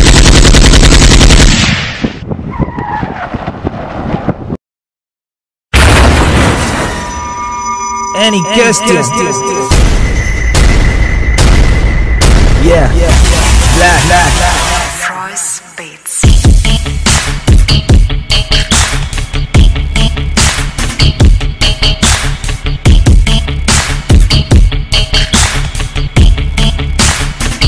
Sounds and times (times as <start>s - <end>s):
Music: 7.0s - 27.6s
Speech: 8.2s - 9.7s.